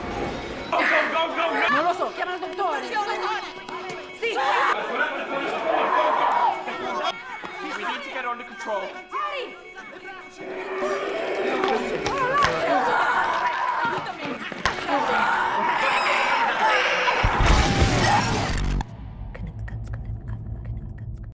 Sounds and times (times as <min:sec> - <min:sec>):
Music: 0:00.0 - 0:21.3.